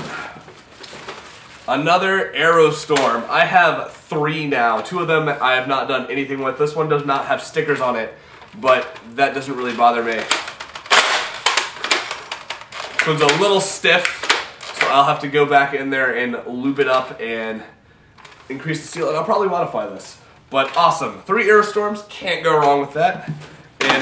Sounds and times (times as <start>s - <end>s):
Inside, small room: 0.0s - 24.0s
Speech: 1.7s - 10.4s, 13.0s - 17.8s, 18.5s - 24.0s.